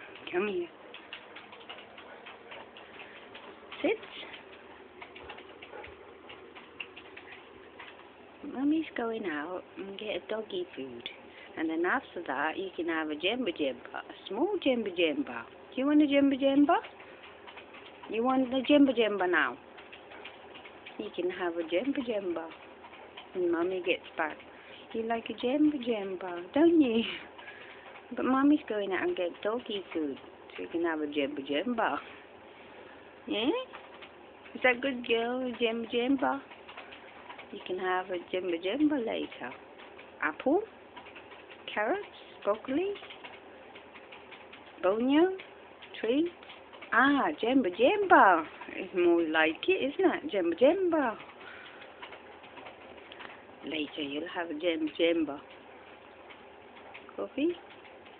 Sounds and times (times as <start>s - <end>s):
Speech: 0.2s - 0.7s, 3.8s - 4.4s, 8.4s - 16.9s, 18.1s - 19.6s, 21.0s - 22.6s, 23.4s - 27.3s, 28.1s - 32.1s, 33.3s - 33.7s, 34.5s - 36.5s, 37.5s - 39.6s, 40.2s - 40.7s, 41.7s - 43.0s, 44.8s - 45.4s, 46.0s - 51.2s, 53.6s - 55.4s, 57.1s - 57.6s.